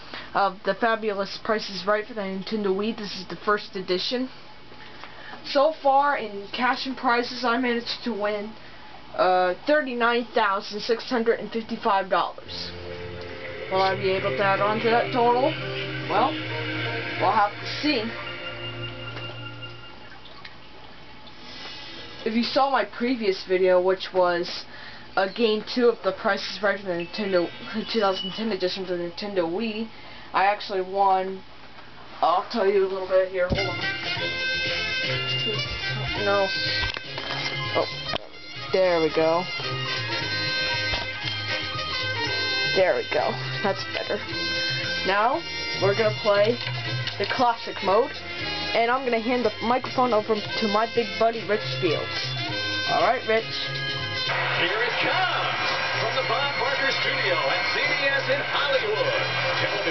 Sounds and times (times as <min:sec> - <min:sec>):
Speech: 0:00.4 - 0:04.3, 0:05.5 - 0:08.6, 0:09.2 - 0:12.8, 0:13.7 - 0:15.5, 0:22.2 - 0:31.4, 0:32.2 - 0:33.7, 0:48.8 - 0:52.1
Music: 0:12.4 - 0:20.2, 0:26.6 - 0:28.4, 0:32.6 - 0:59.9.